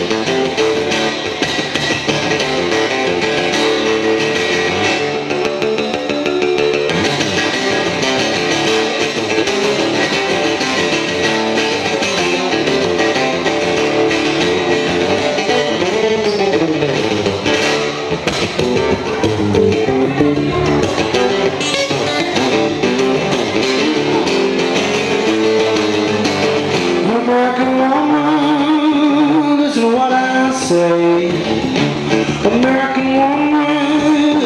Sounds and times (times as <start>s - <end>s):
Guitar: 0.0s - 34.4s.